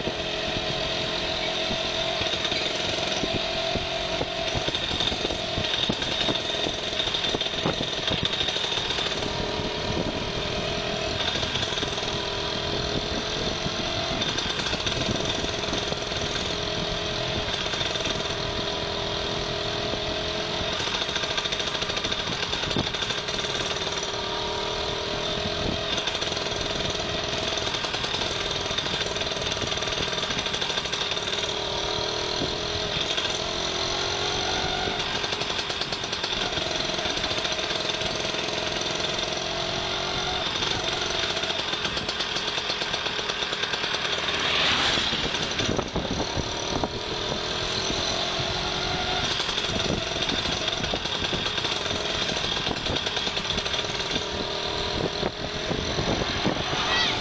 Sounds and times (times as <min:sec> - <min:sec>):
Vehicle: 0:00.0 - 0:57.2.